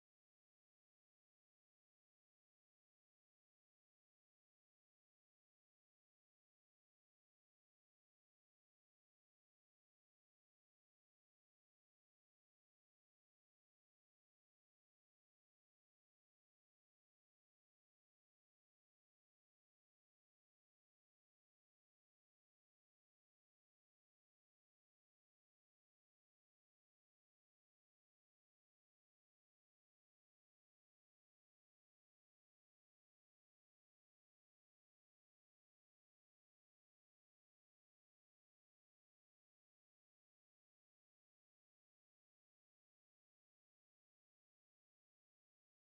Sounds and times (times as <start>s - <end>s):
Music: 0.0s - 45.8s.